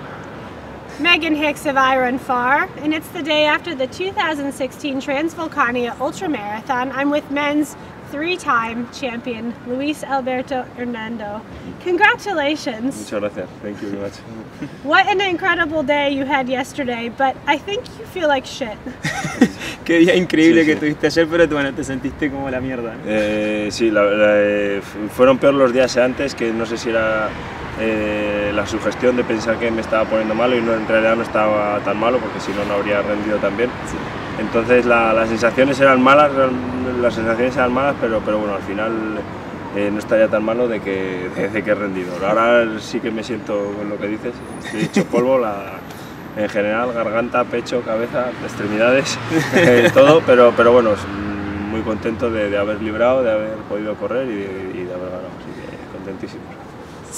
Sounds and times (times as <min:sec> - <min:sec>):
Outside, urban or manmade: 0:00.0 - 0:57.1.